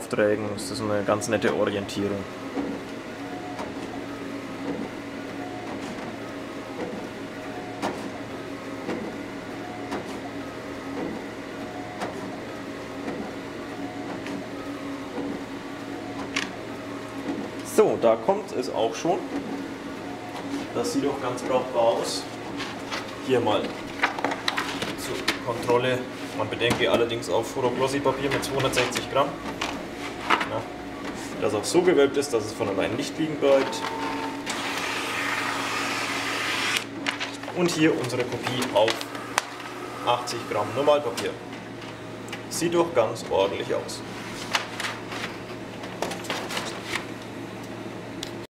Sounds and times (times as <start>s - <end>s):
Speech: 0.0s - 2.3s, 17.7s - 19.3s, 20.7s - 22.3s, 23.2s - 23.8s, 24.9s - 29.4s, 31.4s - 33.9s, 37.4s - 39.1s, 40.0s - 41.4s, 42.5s - 44.1s
Printer: 0.0s - 48.5s.